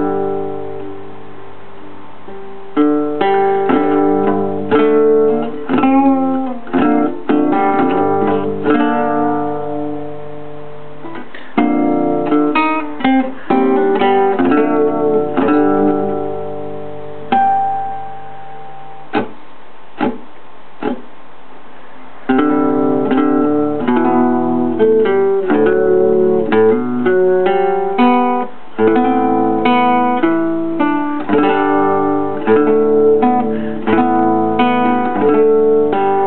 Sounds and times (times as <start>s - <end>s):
Strum: 0.0s - 36.2s.